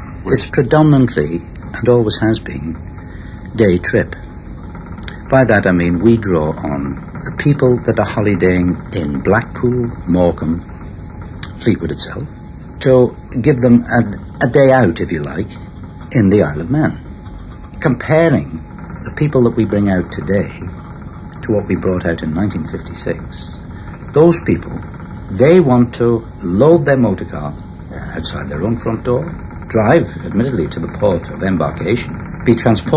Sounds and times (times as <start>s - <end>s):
Speech: 0.2s - 2.8s, 3.5s - 4.2s, 5.1s - 10.7s, 11.4s - 17.0s, 17.8s - 20.8s, 21.4s - 32.9s.